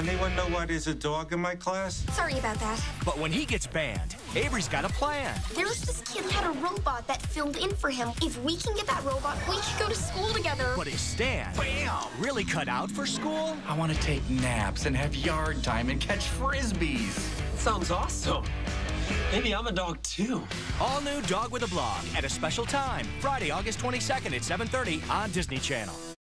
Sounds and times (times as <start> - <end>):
Music: 0.0 - 26.2
Speech: 3.1 - 18.4, 19.3 - 26.0.